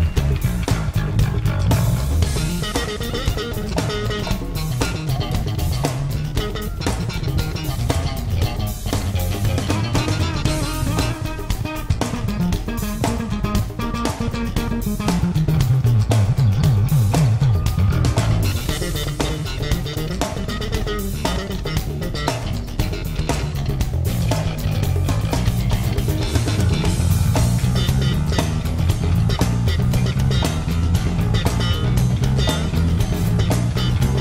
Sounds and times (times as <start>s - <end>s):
Music: 0.0s - 34.2s.